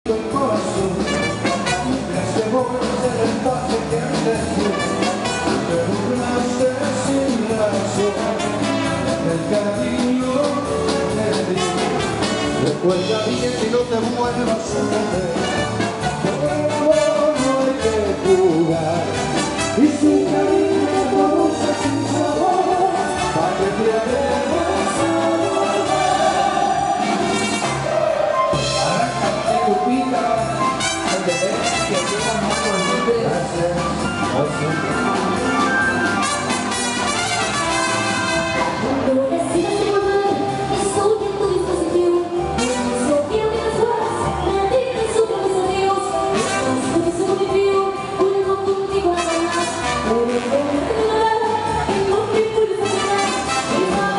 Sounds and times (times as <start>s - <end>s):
Singing: 0.1s - 33.7s, 38.8s - 54.1s
Rock and roll: 0.1s - 54.1s.